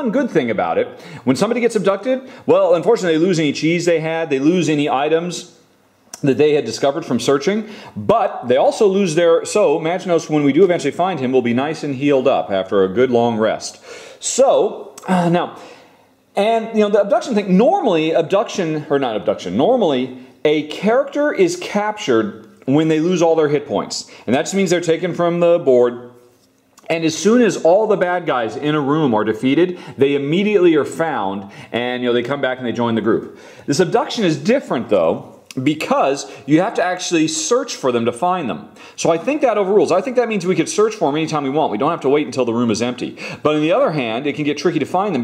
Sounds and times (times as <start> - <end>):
Speech: 0.0 - 15.7, 16.3 - 26.2, 26.8 - 45.2.